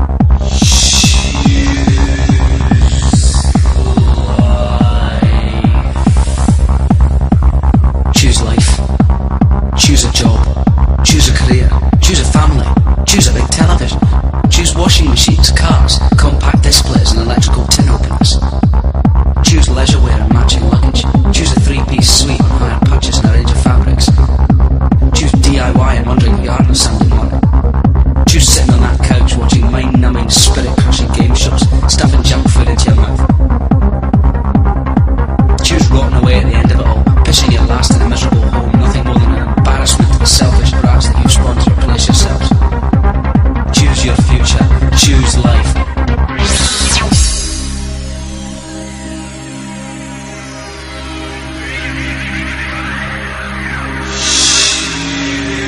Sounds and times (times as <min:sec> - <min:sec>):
Techno: 0:00.0 - 0:55.6
Speech: 0:00.5 - 0:06.0, 0:08.1 - 0:08.9, 0:09.8 - 0:18.6, 0:19.4 - 0:24.3, 0:25.1 - 0:27.4, 0:28.3 - 0:33.3, 0:35.6 - 0:42.6, 0:43.7 - 0:45.8.